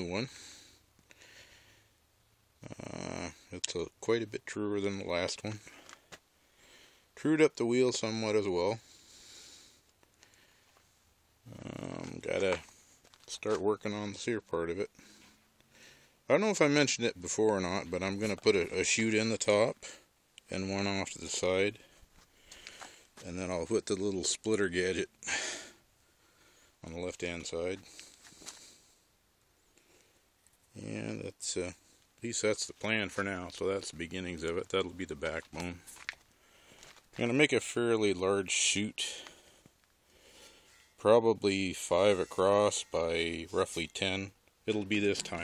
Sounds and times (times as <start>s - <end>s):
Speech: 0.0s - 0.4s, 2.6s - 5.7s, 7.2s - 8.8s, 11.5s - 12.7s, 13.3s - 15.0s, 16.3s - 21.8s, 23.2s - 25.1s, 26.8s - 27.9s, 30.8s - 35.9s, 37.2s - 39.3s, 41.0s - 45.4s.